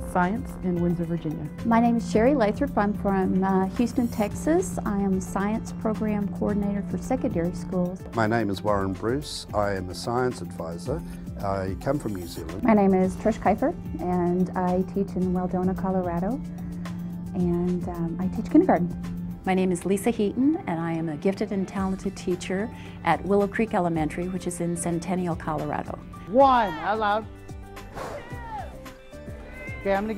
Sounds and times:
Music: 0.0 - 30.1.

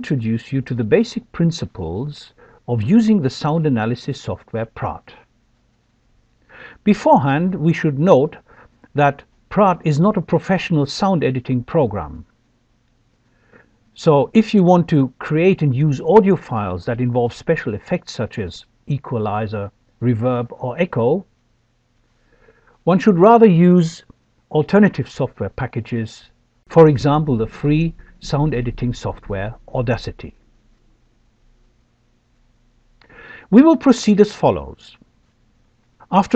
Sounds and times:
Speech: 0.0 - 5.3, 6.8 - 12.3, 14.0 - 21.3, 22.8 - 30.4, 33.5 - 35.0, 36.0 - 36.3.

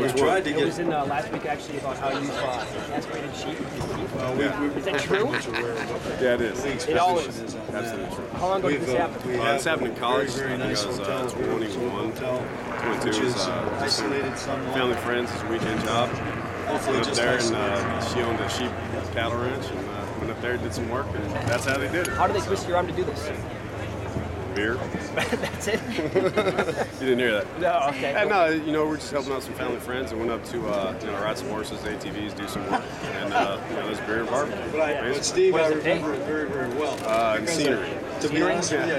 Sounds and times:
Speech: 0.0 - 25.2.

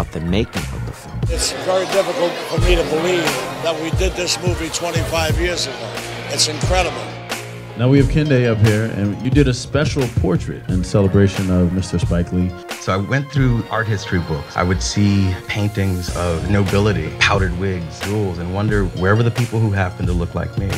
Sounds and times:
Speech: 0.0 - 7.2, 7.8 - 20.7
Music: 0.0 - 20.7.

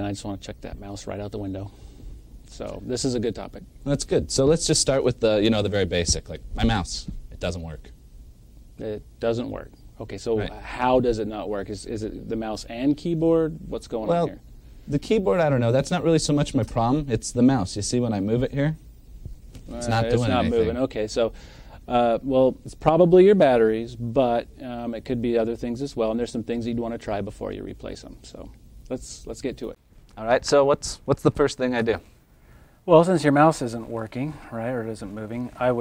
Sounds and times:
Speech: 0.0 - 1.7, 2.5 - 7.9, 8.8 - 18.8, 19.7 - 21.3, 21.9 - 32.1, 32.9 - 35.8.

